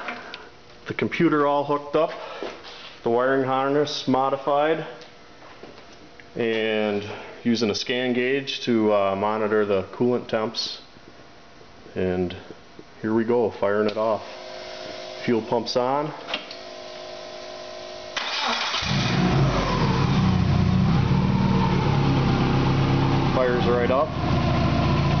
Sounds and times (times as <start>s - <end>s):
Speech: 0.8s - 2.2s, 3.0s - 5.0s, 6.4s - 10.9s, 11.9s - 14.3s, 15.2s - 16.3s, 23.3s - 24.2s.